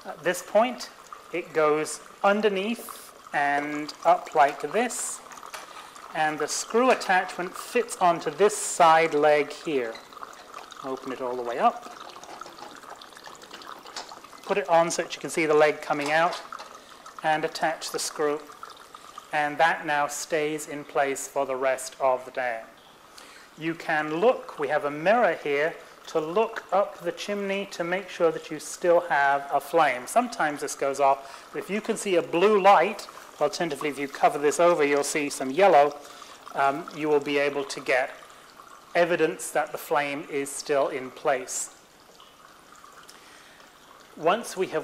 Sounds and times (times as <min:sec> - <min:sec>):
Speech: 0:00.0 - 0:05.2, 0:06.2 - 0:10.0, 0:10.8 - 0:11.9, 0:14.5 - 0:16.5, 0:17.2 - 0:18.5, 0:19.4 - 0:22.7, 0:23.6 - 0:38.2, 0:39.0 - 0:41.8, 0:44.2 - 0:44.8
Liquid: 0:00.0 - 0:44.8
Water tap, faucet: 0:00.0 - 0:44.8.